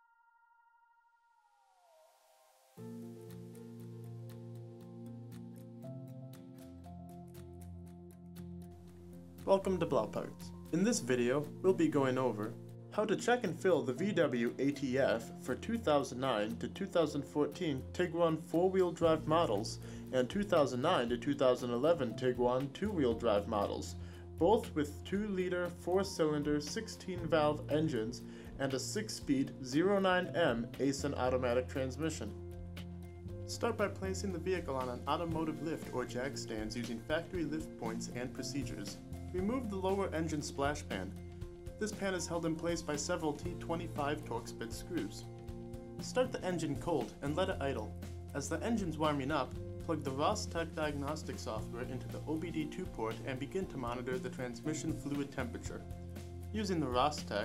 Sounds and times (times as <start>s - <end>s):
Music: 0.0s - 57.4s
Speech: 9.5s - 32.4s, 33.5s - 41.2s, 41.8s - 45.2s, 46.0s - 55.8s, 56.6s - 57.4s.